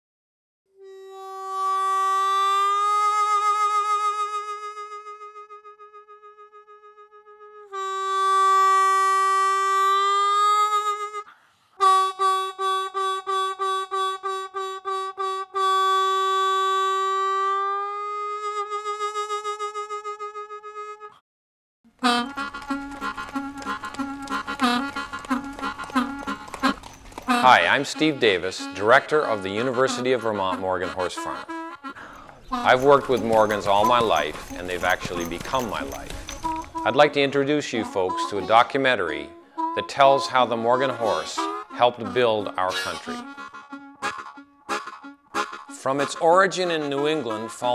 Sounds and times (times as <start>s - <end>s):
Clip-clop: 22.0s - 28.4s, 32.0s - 37.0s
Country: 22.0s - 47.7s
Speech: 27.4s - 31.4s, 32.6s - 36.1s, 36.9s - 43.2s, 45.8s - 47.7s.